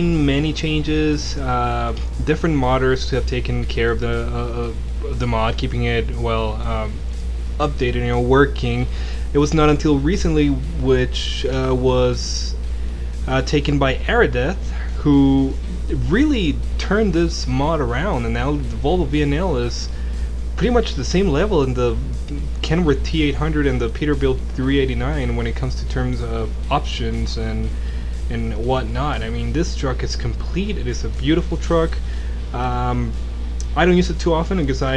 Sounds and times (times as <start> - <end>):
Speech: 0.0 - 7.0, 7.6 - 12.6, 13.2 - 20.0, 20.6 - 34.9.